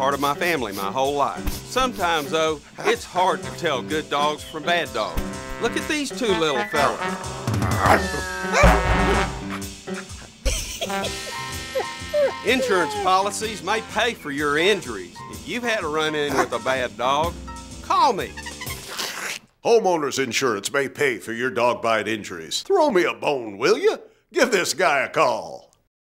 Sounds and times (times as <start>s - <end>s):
Speech: 0.0s - 7.0s, 12.5s - 18.3s, 19.6s - 25.8s
Music: 0.0s - 19.4s.